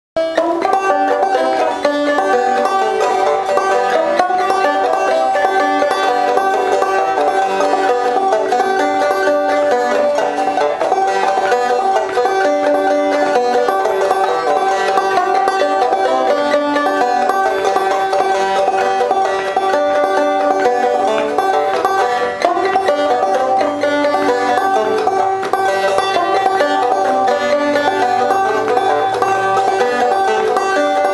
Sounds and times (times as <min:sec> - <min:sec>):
Banjo: 0:00.2 - 0:31.1.